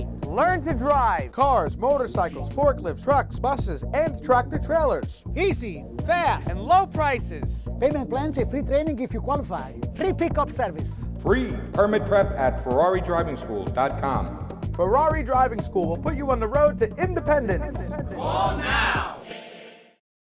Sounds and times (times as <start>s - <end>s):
Music: 0.0s - 20.0s
Speech: 0.2s - 18.6s.